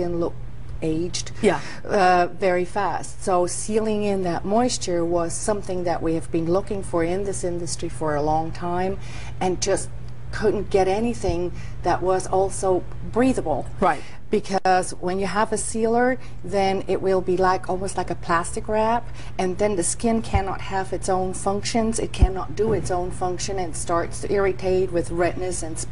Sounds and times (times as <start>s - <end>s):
Female speech, woman speaking: 0.0s - 25.9s.